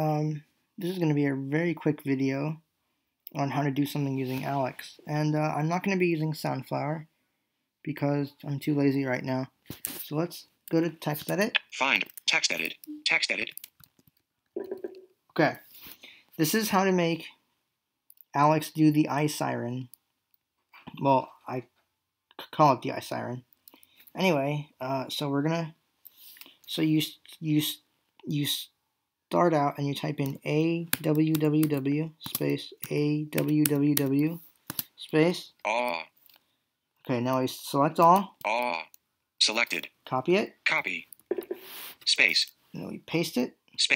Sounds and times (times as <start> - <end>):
Speech: 0.0 - 2.6, 3.3 - 7.1, 7.8 - 13.6, 15.3 - 15.7, 16.4 - 17.4, 18.3 - 20.0, 20.8 - 21.7, 22.3 - 23.5, 24.1 - 25.8, 26.7 - 34.4, 35.0 - 36.1, 37.0 - 41.2, 42.0 - 43.9.